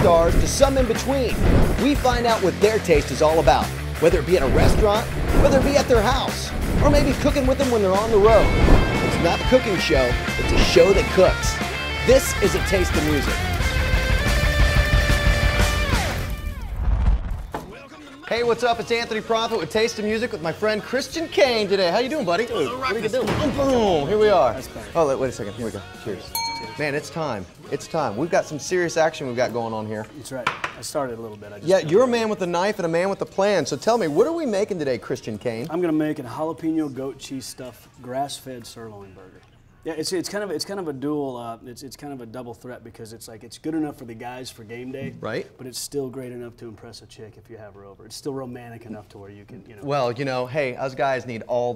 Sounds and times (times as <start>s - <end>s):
Speech: 0.0s - 8.5s, 9.2s - 13.4s, 17.7s - 51.7s
Music: 0.0s - 43.1s.